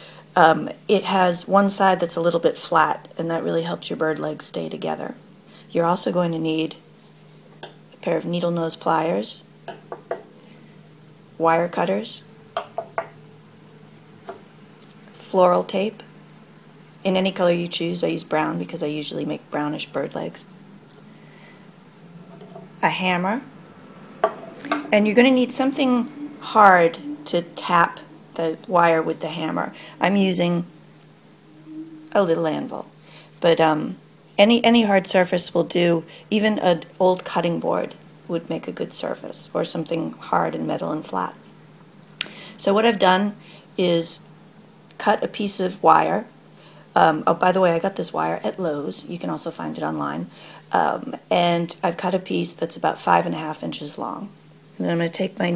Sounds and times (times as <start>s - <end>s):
Speech: 0.4s - 6.8s, 8.0s - 9.5s, 11.4s - 12.2s, 15.2s - 16.0s, 17.0s - 20.5s, 22.8s - 23.5s, 24.9s - 30.7s, 31.7s - 41.4s, 42.6s - 44.3s, 45.0s - 46.3s, 47.0s - 55.5s.